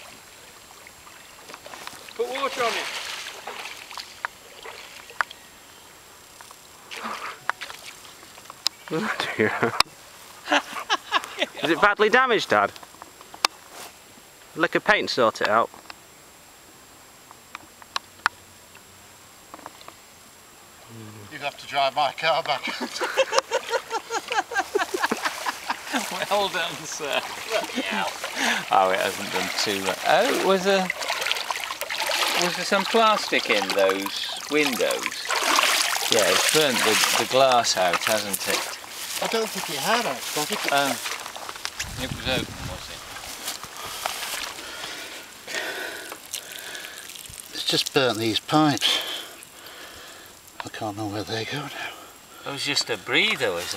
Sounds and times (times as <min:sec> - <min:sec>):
Speech: 0:02.2 - 0:02.9, 0:28.7 - 0:30.9, 0:32.3 - 0:35.3, 0:47.6 - 0:49.0, 0:50.6 - 0:51.8, 0:52.5 - 0:53.7.